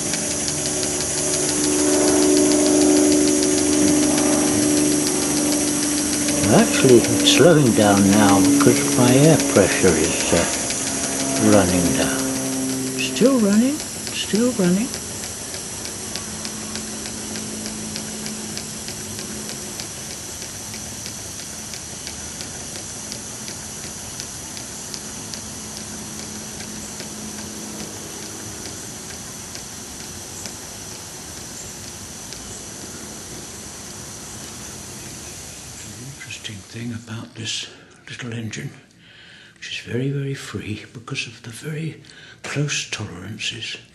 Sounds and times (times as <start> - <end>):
Engine: 0.0 - 39.8
Speech: 6.4 - 10.6, 11.4 - 12.3, 13.0 - 15.0, 35.9 - 38.9, 39.6 - 43.9.